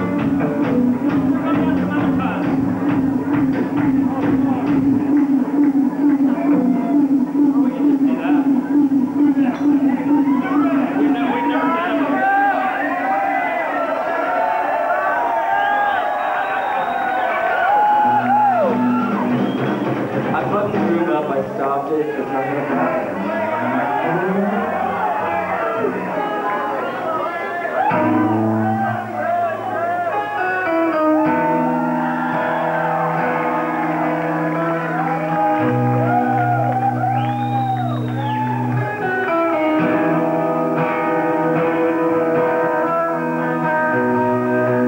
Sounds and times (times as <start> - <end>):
Music: 0.0 - 13.2, 17.4 - 21.5, 22.7 - 27.0, 27.8 - 44.8
Speech: 1.3 - 2.6, 6.3 - 13.4, 20.3 - 27.8.